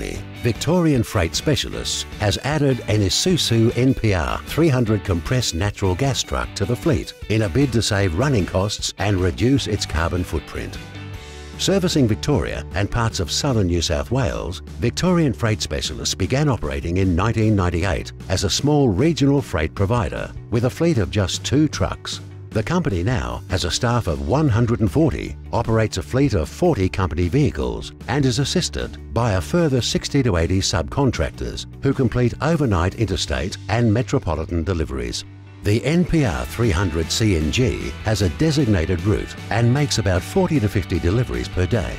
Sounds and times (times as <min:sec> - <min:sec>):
Speech: 0:00.0 - 0:10.8, 0:11.6 - 0:41.9
Music: 0:00.0 - 0:41.9.